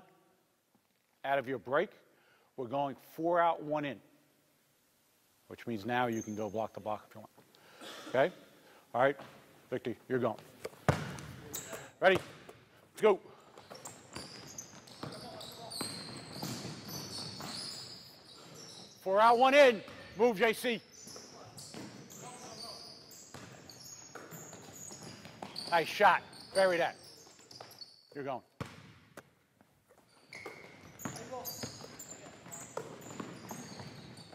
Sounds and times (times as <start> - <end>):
Basketball bounce: 10.9 - 11.4.